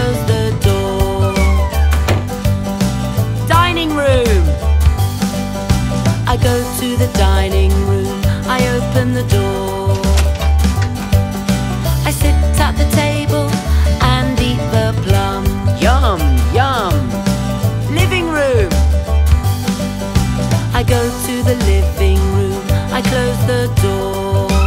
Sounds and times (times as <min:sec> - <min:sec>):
Music: 0:00.0 - 0:24.6
Door: 0:01.9 - 0:02.4
Speech: 0:03.5 - 0:04.6, 0:15.8 - 0:17.1, 0:17.9 - 0:18.8.